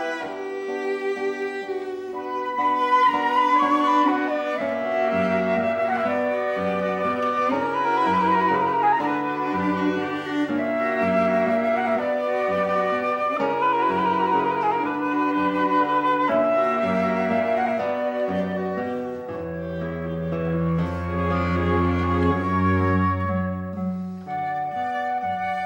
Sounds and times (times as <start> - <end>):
Flute: 0.0 - 25.6.